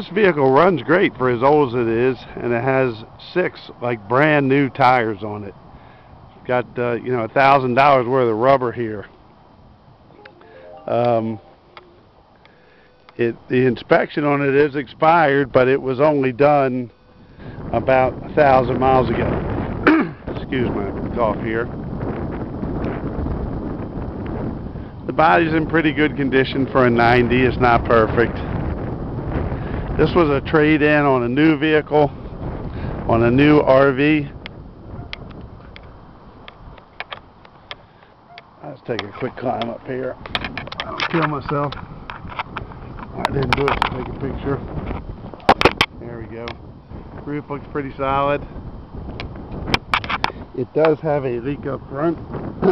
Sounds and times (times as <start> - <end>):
Speech: 0.0 - 5.6, 6.4 - 9.1, 10.7 - 11.4, 13.2 - 16.9, 17.7 - 19.3, 20.3 - 21.7, 25.1 - 28.5, 30.0 - 32.1, 33.1 - 34.3, 38.6 - 40.2, 40.8 - 41.8, 43.2 - 44.6, 46.0 - 46.6, 47.2 - 48.4, 50.6 - 52.7.